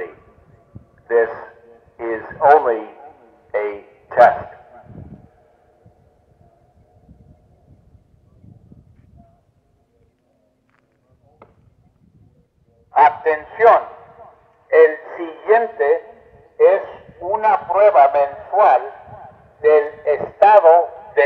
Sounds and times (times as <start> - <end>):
Speech: 0.0 - 4.6, 12.9 - 14.0, 14.7 - 19.0, 19.6 - 21.2.